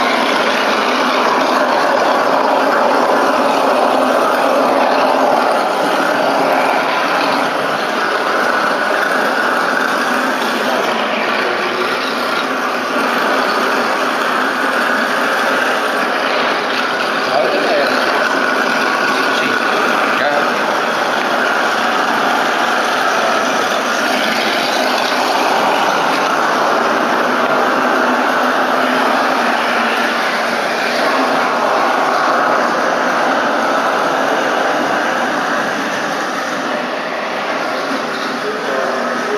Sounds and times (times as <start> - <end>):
Speech: 17.3 - 18.2, 19.4 - 20.6, 38.4 - 39.3.